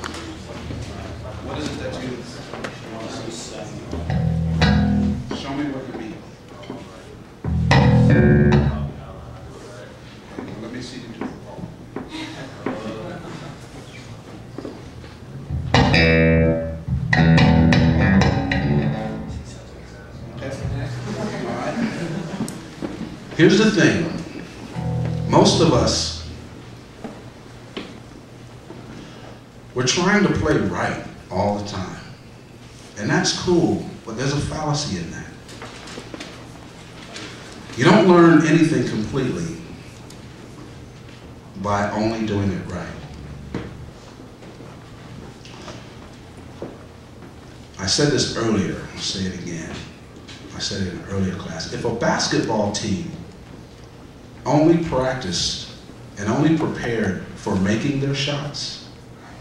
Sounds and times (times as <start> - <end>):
Speech: 0.0 - 4.1, 5.3 - 7.2, 8.6 - 13.6, 19.3 - 22.2, 23.4 - 24.3, 25.3 - 26.3, 29.8 - 32.2, 33.0 - 35.4, 37.8 - 39.8, 41.6 - 43.1, 47.8 - 53.3, 54.4 - 58.9.